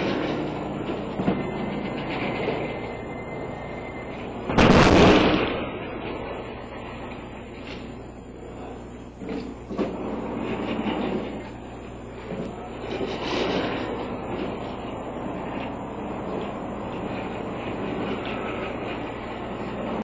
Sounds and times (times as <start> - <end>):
Sliding door: 0.0 - 8.0, 9.2 - 20.0
Speech: 8.5 - 9.1, 12.3 - 13.1.